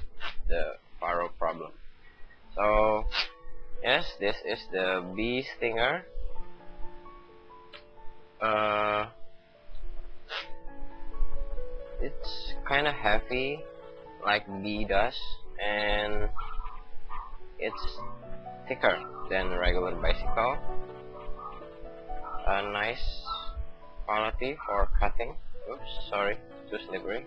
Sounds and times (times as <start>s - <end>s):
Music: 0.0s - 27.2s
Speech: 0.5s - 1.8s, 2.6s - 3.1s, 3.9s - 6.0s, 8.4s - 9.1s, 12.0s - 13.6s, 14.2s - 16.4s, 17.6s - 18.0s, 18.7s - 20.6s, 22.4s - 27.2s.